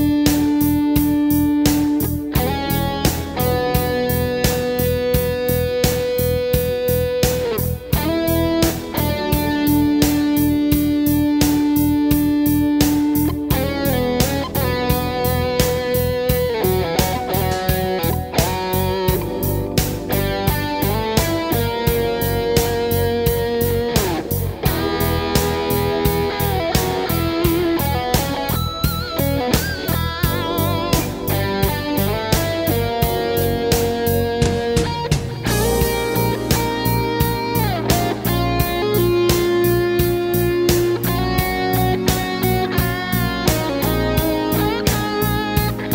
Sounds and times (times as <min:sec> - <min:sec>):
Music: 0:00.0 - 0:45.9.